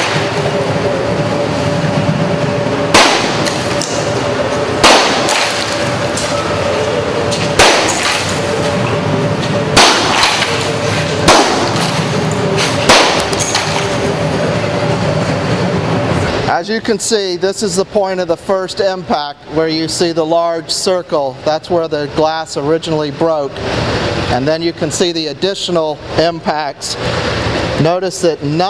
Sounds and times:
Speech: 16.5s - 23.6s, 24.3s - 27.0s, 27.8s - 28.6s.

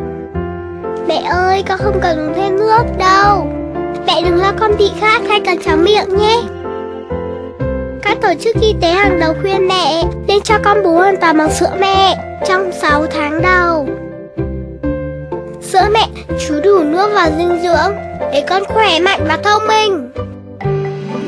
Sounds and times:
Music: 0.0s - 21.2s
Speech: 1.1s - 3.5s, 4.1s - 6.5s, 8.0s - 13.9s, 15.6s - 20.1s.

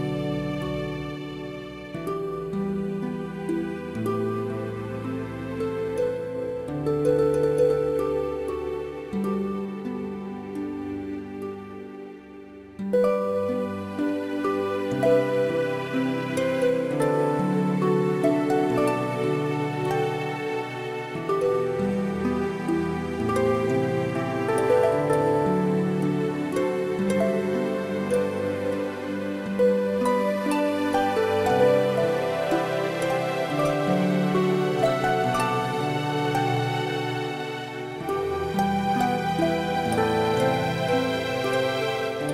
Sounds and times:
Music: 0.0s - 42.3s.

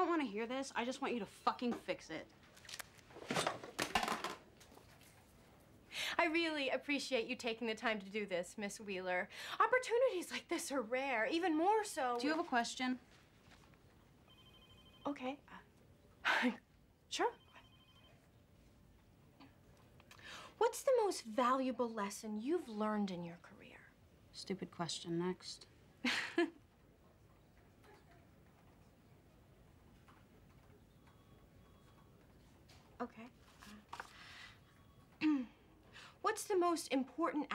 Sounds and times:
Female speech, woman speaking: 0.0s - 2.3s, 6.2s - 13.0s, 15.1s - 15.6s, 17.1s - 17.4s, 20.6s - 25.7s, 33.0s - 33.3s, 36.2s - 37.5s
Conversation: 0.0s - 3.4s, 6.0s - 18.1s, 18.8s - 26.1s.

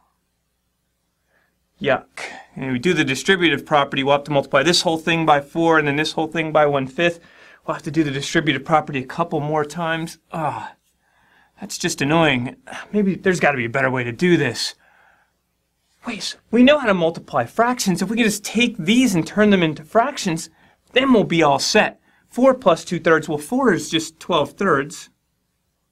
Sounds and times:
Narration, monologue: 0.0s - 25.9s.

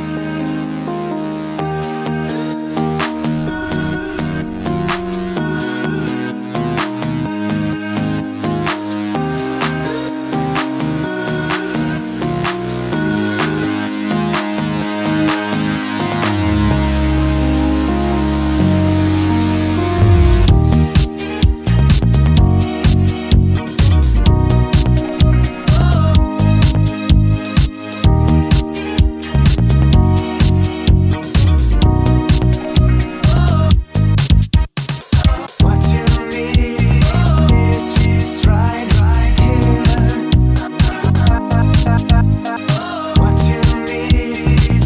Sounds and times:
Music: 0.0s - 44.8s.

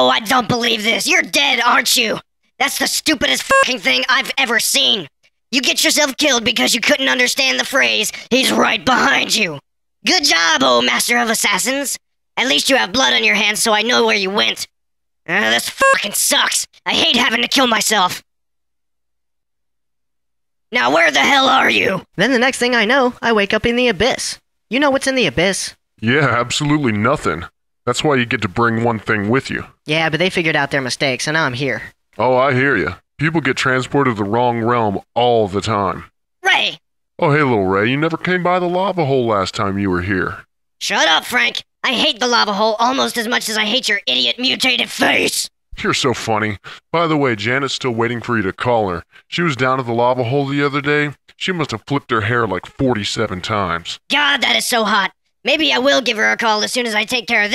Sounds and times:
Speech: 0.0s - 14.7s, 15.3s - 18.2s, 20.7s - 57.5s.

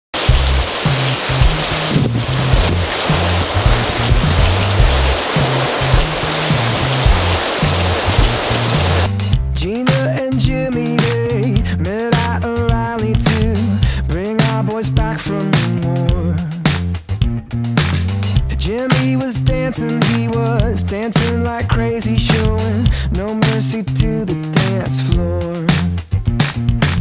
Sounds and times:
Waterfall: 0.2s - 9.3s
Pink noise: 0.2s - 10.1s.

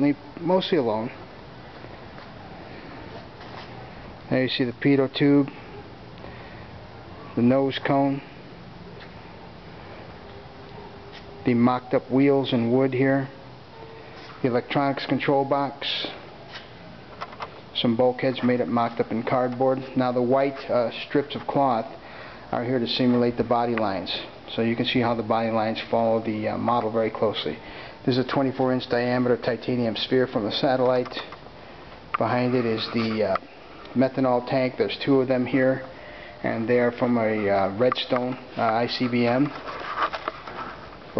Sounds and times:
Speech: 0.0s - 1.2s, 4.3s - 5.7s, 7.3s - 8.3s, 11.4s - 13.4s, 14.4s - 16.2s, 17.8s - 31.4s, 32.2s - 39.6s.

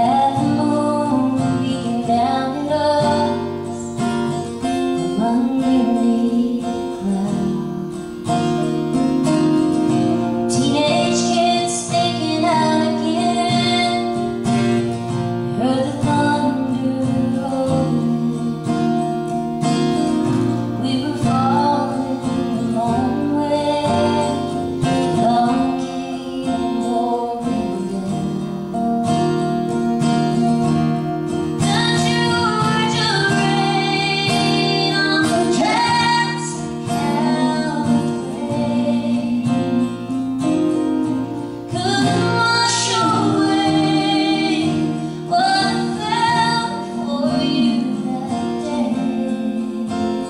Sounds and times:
Country: 0.0s - 50.3s.

